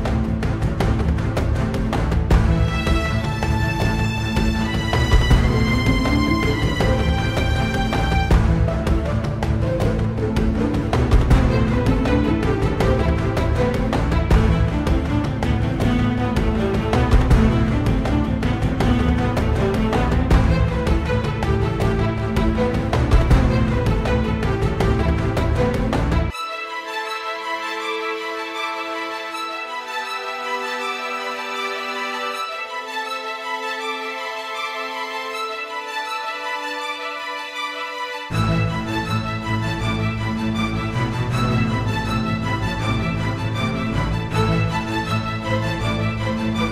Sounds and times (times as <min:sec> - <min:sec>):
Music: 0:00.0 - 0:46.7.